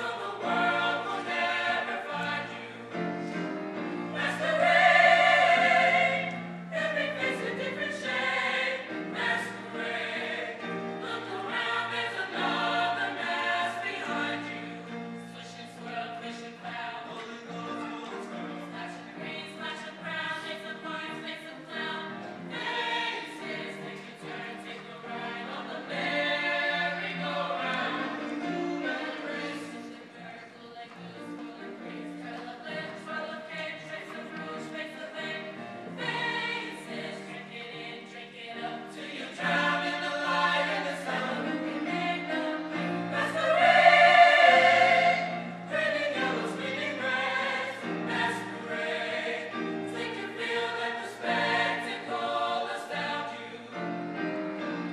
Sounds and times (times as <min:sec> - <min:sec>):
Music: 0:00.0 - 0:54.9.